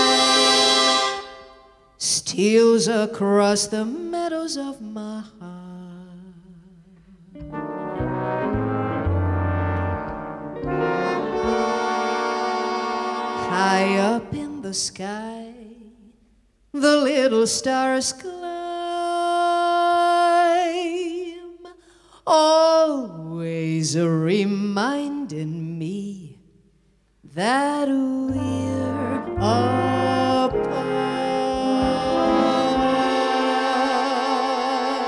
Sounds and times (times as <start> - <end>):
Music: 0.0 - 2.0, 6.9 - 14.9, 28.2 - 35.0.